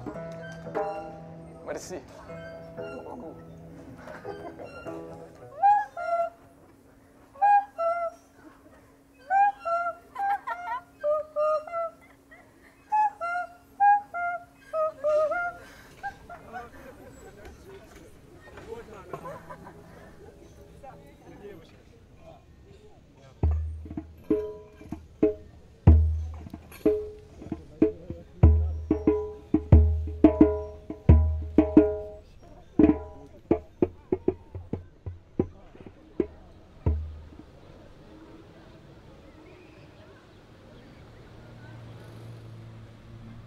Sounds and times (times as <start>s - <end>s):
Outside, rural or natural: 0.0s - 43.4s.